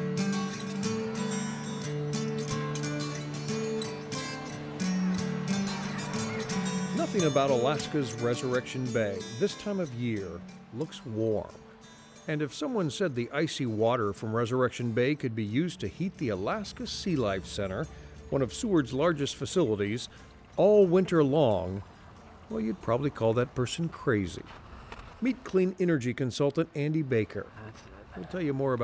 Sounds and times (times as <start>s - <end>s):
Music: 0.0s - 23.4s
Speech: 7.0s - 11.5s, 12.3s - 21.8s, 22.5s - 24.4s, 25.2s - 28.8s.